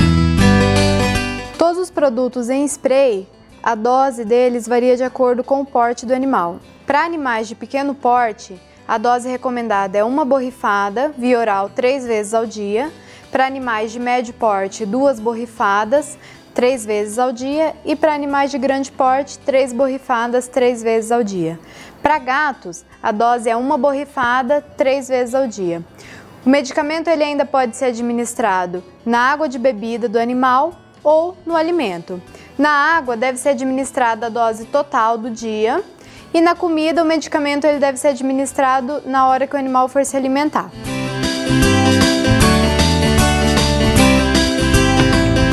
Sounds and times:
Music: 0.0 - 45.5
Speech: 1.6 - 25.8, 26.5 - 40.8.

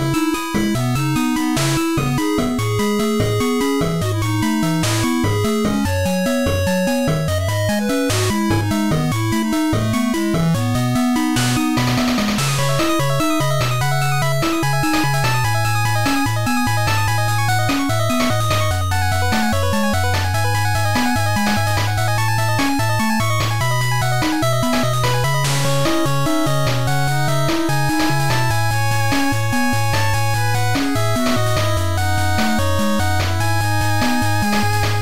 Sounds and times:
Background music: 0.0 - 35.0.

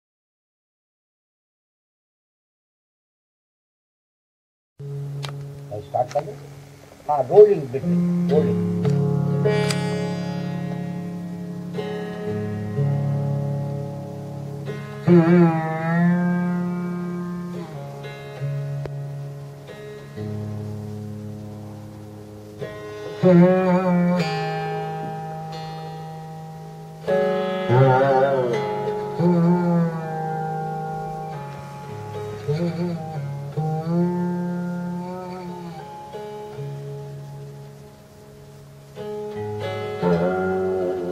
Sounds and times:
Inside, small room: 4.8 - 41.1.

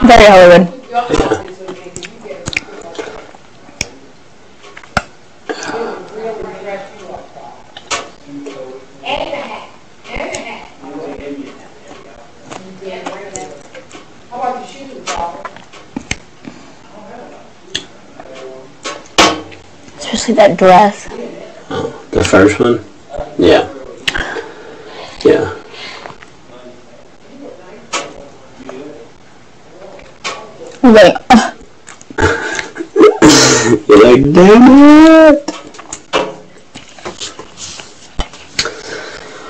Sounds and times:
Inside, small room: 0.0 - 39.4.

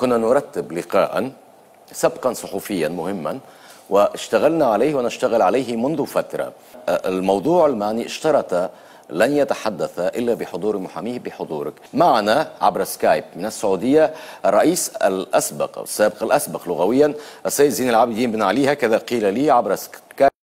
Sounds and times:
Speech: 0.0 - 20.4.

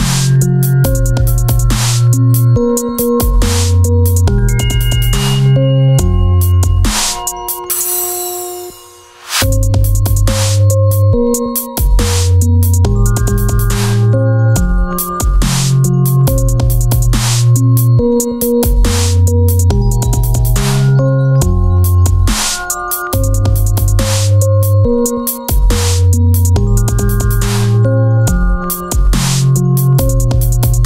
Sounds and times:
Dubstep: 0.0 - 30.8
Electronica: 0.0 - 30.8.

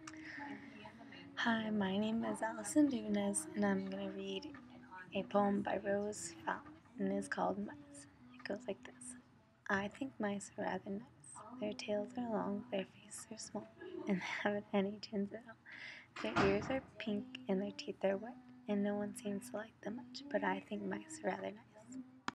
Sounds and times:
Speech: 0.1 - 15.6, 16.2 - 22.0.

